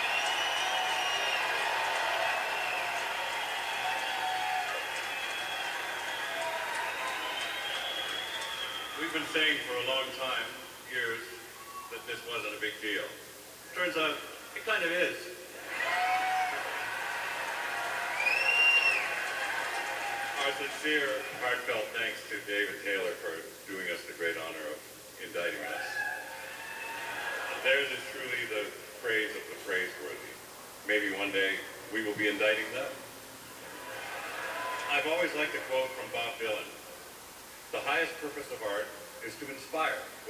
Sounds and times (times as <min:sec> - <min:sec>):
Speech: 0:09.0 - 0:15.4, 0:20.4 - 0:26.0, 0:27.5 - 0:33.0, 0:34.9 - 0:36.8, 0:37.7 - 0:40.3.